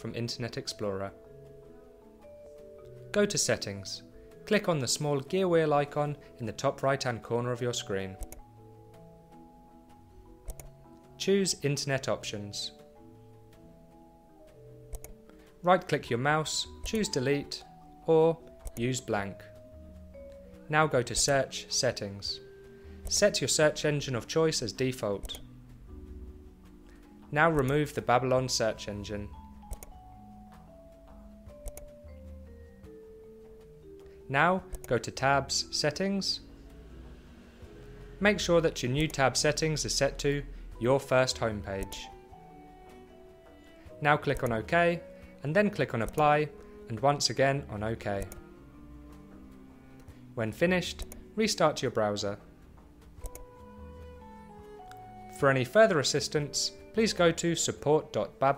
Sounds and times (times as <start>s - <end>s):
Speech: 0.0s - 1.2s, 3.1s - 8.2s, 11.2s - 12.8s, 15.6s - 19.5s, 20.7s - 22.4s, 23.1s - 25.3s, 27.3s - 29.4s, 34.3s - 36.5s, 38.2s - 42.1s, 44.0s - 48.3s, 50.4s - 52.4s, 55.4s - 58.5s
Music: 0.0s - 58.5s.